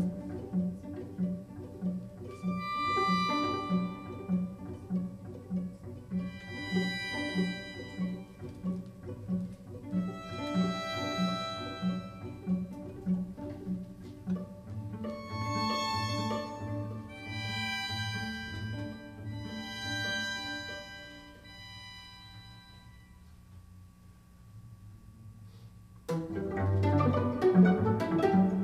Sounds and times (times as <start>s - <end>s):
String section: 0.0s - 23.3s, 26.1s - 28.6s.